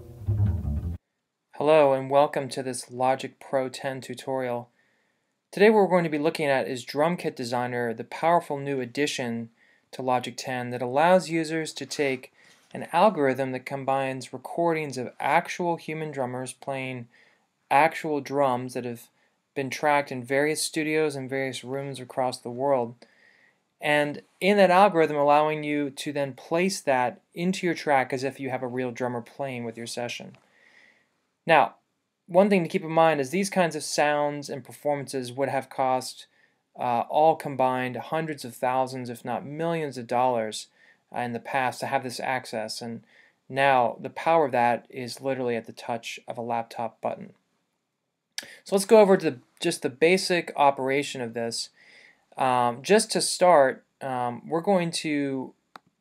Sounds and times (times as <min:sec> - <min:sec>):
Speech: 0:01.6 - 0:04.7, 0:05.6 - 0:17.1, 0:17.7 - 0:23.0, 0:23.8 - 0:30.4, 0:31.5 - 0:47.4, 0:48.4 - 0:51.8, 0:52.4 - 0:55.6.